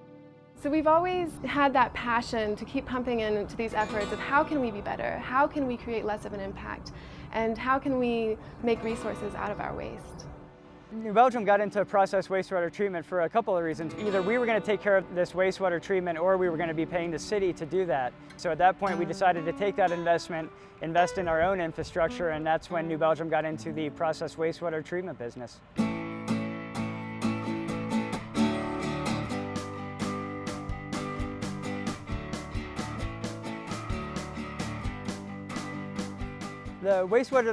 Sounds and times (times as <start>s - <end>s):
Music: 0.0s - 37.5s
Speech: 11.0s - 25.6s, 36.8s - 37.5s.